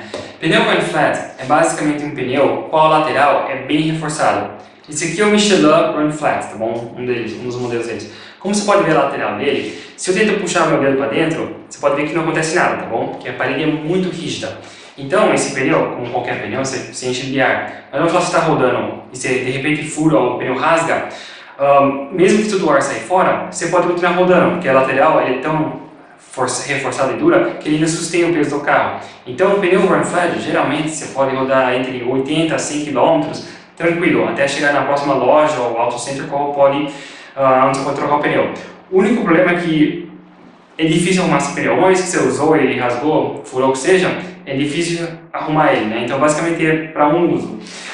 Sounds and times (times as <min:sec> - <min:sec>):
Speech: 0:00.0 - 0:40.0, 0:40.8 - 0:47.9.